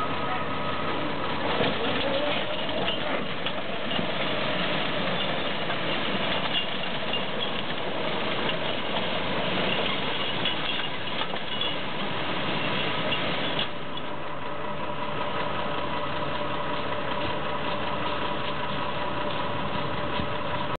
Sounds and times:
Vehicle: 0.0 - 20.7.

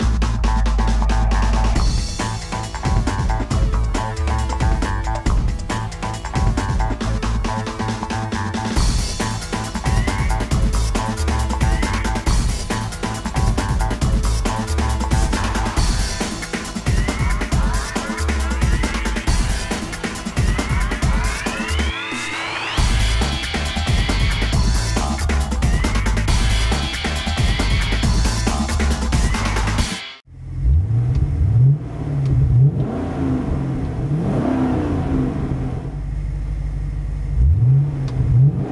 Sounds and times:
Music: 0.0 - 30.3.

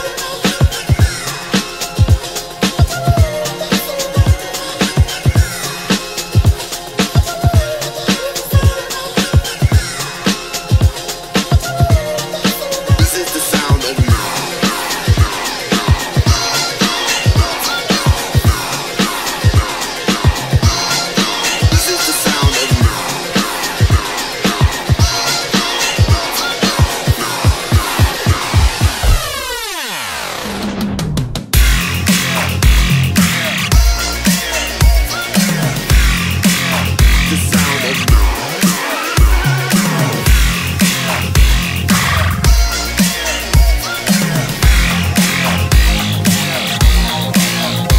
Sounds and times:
Music: 0.0 - 47.9
Speech: 13.0 - 14.4, 21.7 - 23.0, 37.2 - 38.2.

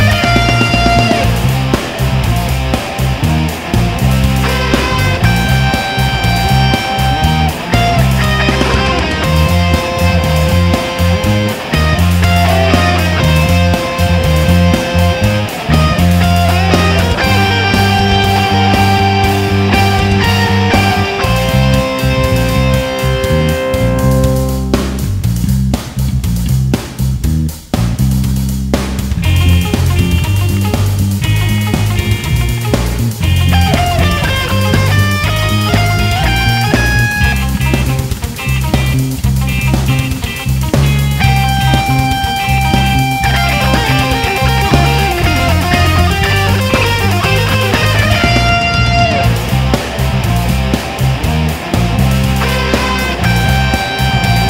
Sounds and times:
Strum: 0.0 - 54.4.

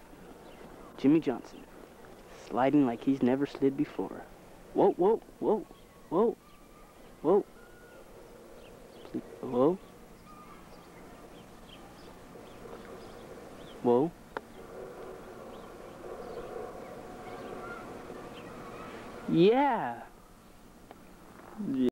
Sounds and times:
Speech: 21.6 - 21.9.

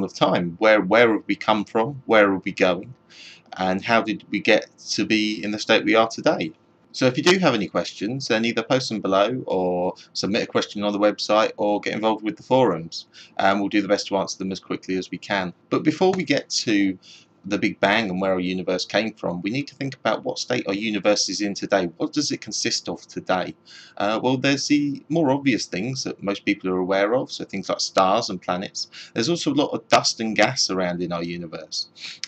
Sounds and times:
Speech: 0.0 - 32.2.

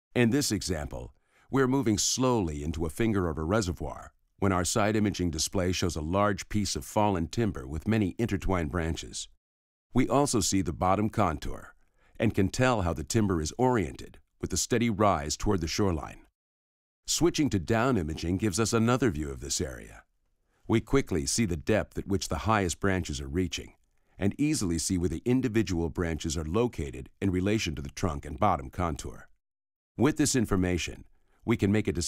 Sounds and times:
Speech: 0.1 - 9.4, 10.0 - 16.3, 17.1 - 20.1, 20.7 - 29.3, 30.0 - 32.0.

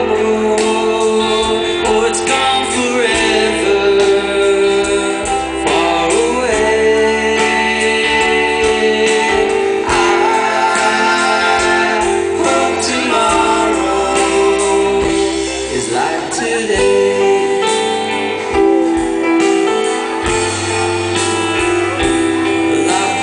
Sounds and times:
Singing: 0.0 - 17.7, 22.6 - 23.2
Vocal music: 0.0 - 23.2.

